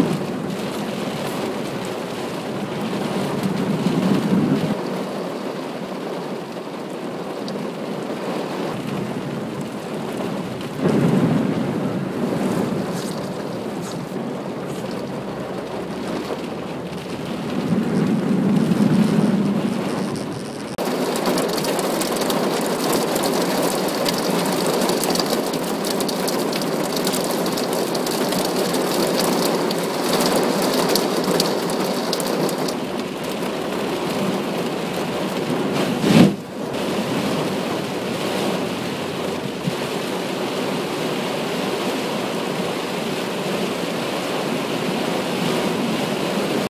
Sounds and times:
Car: 0.0s - 46.6s
Rain: 0.0s - 46.6s.

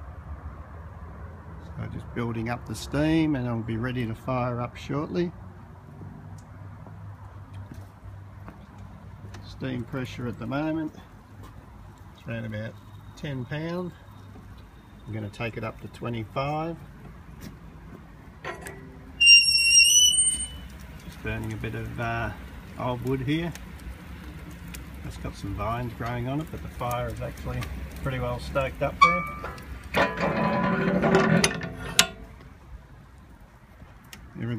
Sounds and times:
Speech: 1.8s - 5.4s, 9.4s - 11.1s, 12.2s - 14.0s, 15.1s - 16.8s, 21.1s - 23.6s, 25.0s - 29.3s, 34.4s - 34.5s.

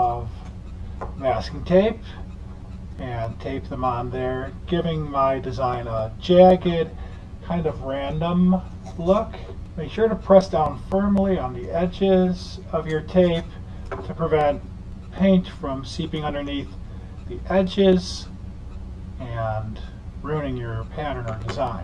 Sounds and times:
Speech: 0.0s - 0.4s, 1.2s - 2.2s, 3.0s - 14.6s, 15.2s - 18.3s, 19.2s - 21.8s.

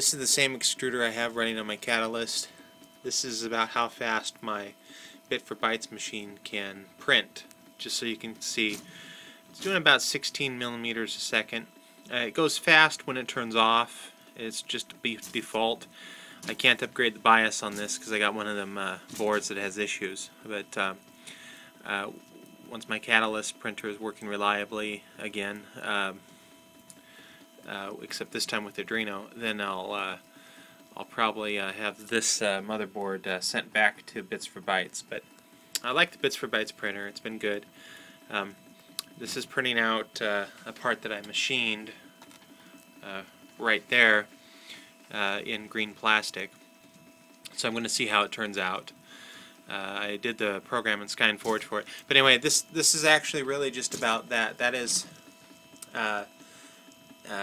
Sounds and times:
Speech: 0.0s - 2.5s, 3.1s - 8.8s, 9.6s - 15.9s, 16.5s - 21.0s, 21.8s - 26.2s, 27.6s - 30.2s, 31.0s - 35.2s, 35.8s - 37.7s, 38.3s - 42.0s, 43.0s - 44.3s, 45.1s - 46.5s, 47.5s - 49.0s, 49.7s - 55.1s, 55.8s - 56.3s
Printer: 0.0s - 57.4s.

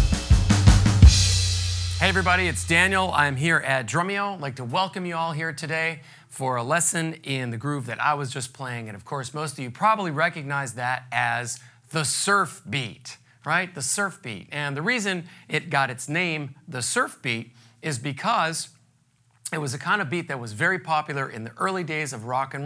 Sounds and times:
Speech: 2.0s - 18.8s, 19.5s - 22.6s.

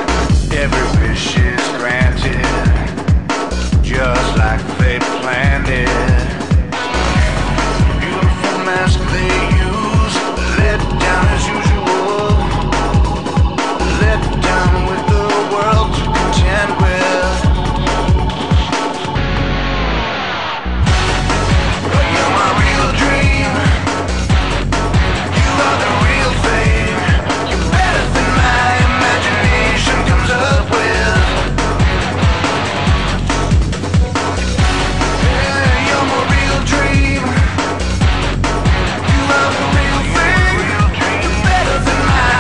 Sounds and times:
Funk: 0.0s - 42.4s
Pop music: 0.0s - 42.4s.

